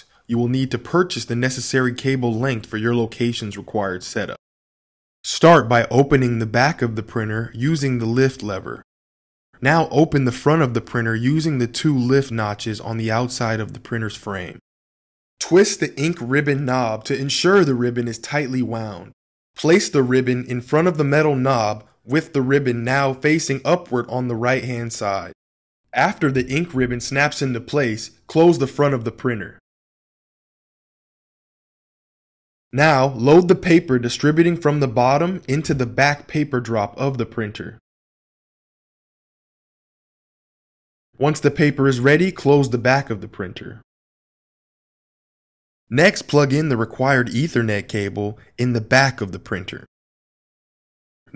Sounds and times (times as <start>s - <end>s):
Speech: 0.0s - 4.4s, 5.3s - 8.9s, 9.6s - 14.6s, 15.4s - 25.4s, 26.0s - 29.6s, 32.8s - 37.8s, 41.2s - 43.9s, 45.9s - 49.9s.